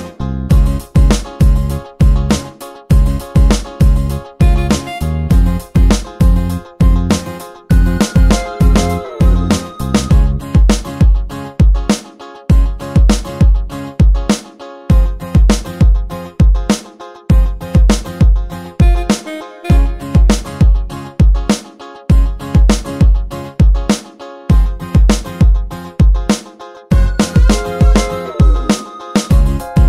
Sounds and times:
Music: 0.0s - 29.8s.

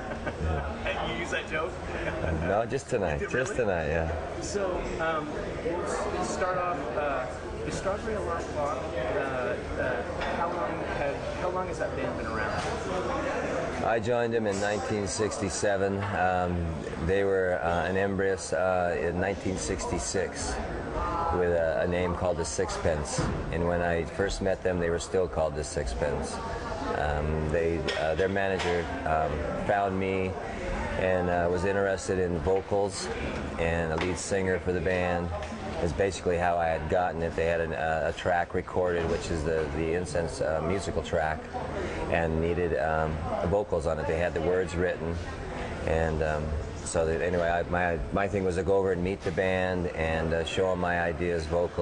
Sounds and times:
Speech: 0.4s - 20.6s, 21.2s - 30.4s, 31.0s - 51.8s.

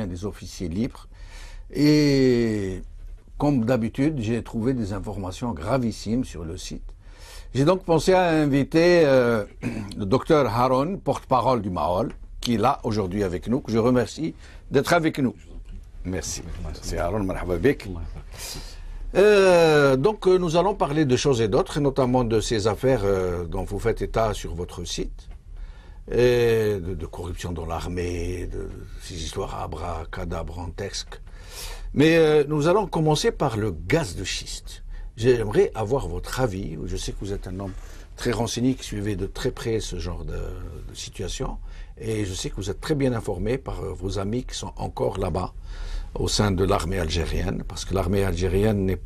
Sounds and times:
Speech: 0.0s - 1.1s, 1.7s - 6.9s, 7.5s - 18.3s, 19.1s - 25.2s, 26.1s - 31.2s, 31.9s - 49.0s.

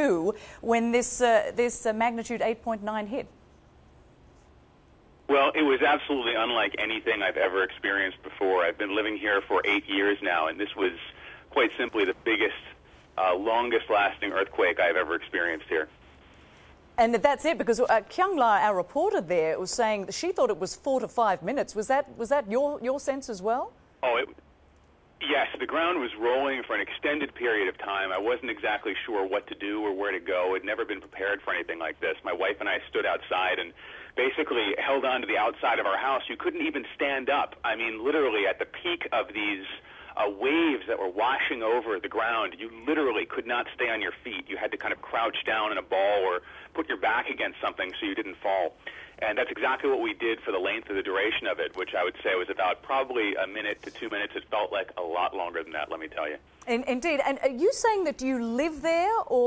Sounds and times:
Speech: 25.2s - 59.4s.

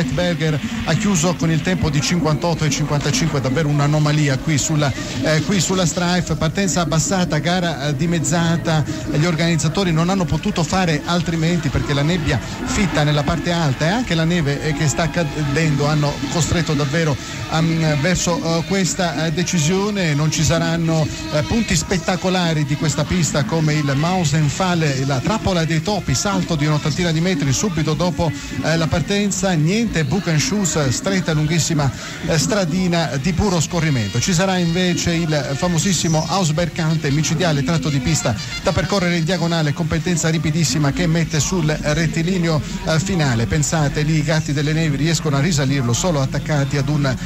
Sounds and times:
Radio: 0.0s - 47.2s
Speech: 0.0s - 47.2s.

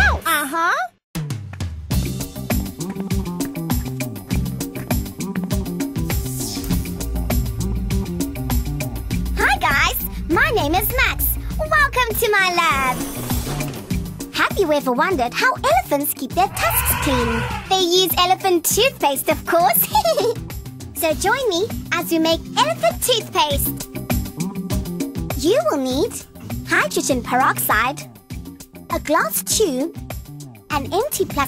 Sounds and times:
Speech: 0.0s - 0.9s, 9.4s - 13.0s, 14.4s - 20.4s, 21.0s - 23.7s, 25.4s - 28.1s, 28.9s - 30.0s, 30.7s - 31.4s
Music: 1.2s - 31.4s.

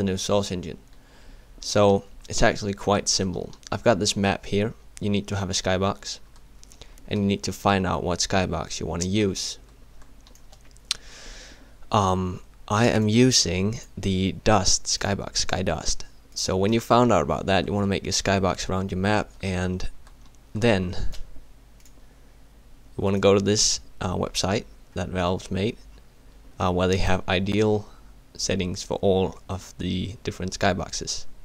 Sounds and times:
Speech: 0.0s - 0.8s, 1.6s - 6.2s, 7.1s - 9.6s, 11.9s - 21.2s, 23.0s - 25.8s, 26.6s - 31.3s.

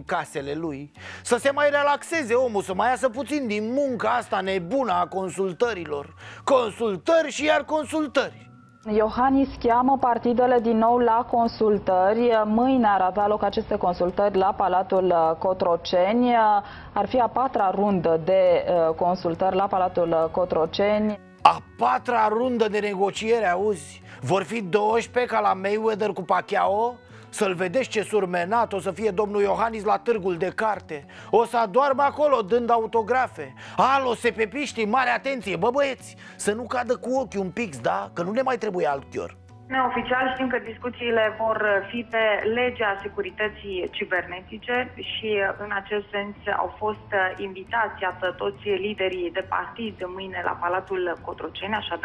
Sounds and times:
Speech: 8.9s - 52.0s.

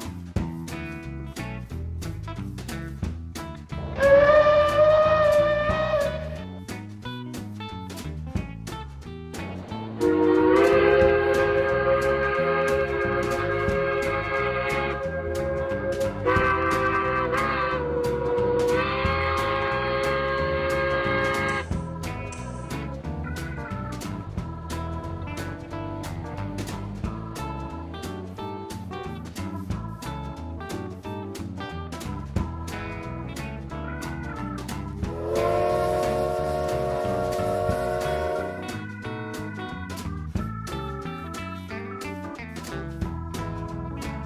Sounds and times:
Music: 0.0s - 44.2s.

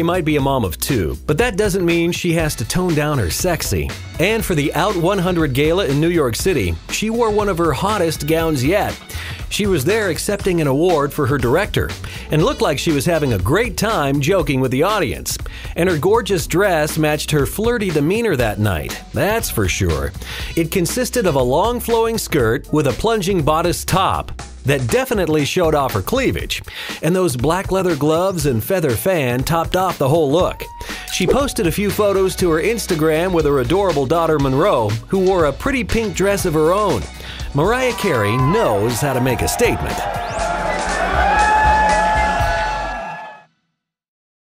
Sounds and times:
Speech: 0.0s - 40.0s
Music: 0.0s - 44.0s.

